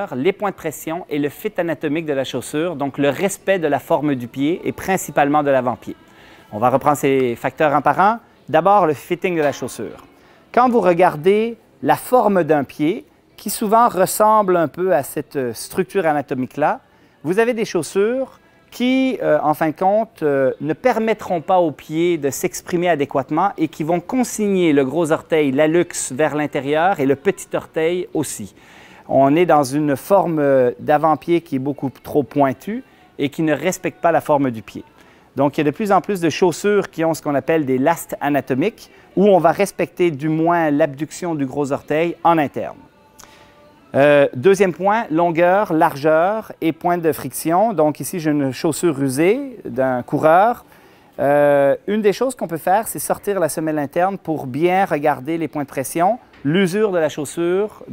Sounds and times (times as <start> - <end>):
Speech: 0.0 - 42.9, 43.9 - 50.6, 51.2 - 57.9.